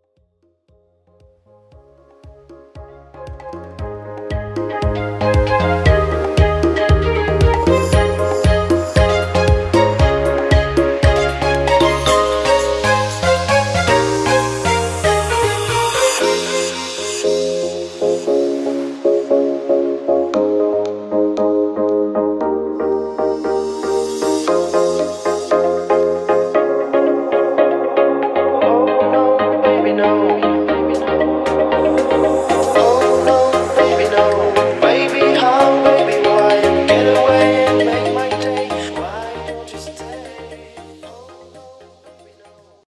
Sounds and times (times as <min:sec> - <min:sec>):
Music: 0:00.0 - 0:42.9.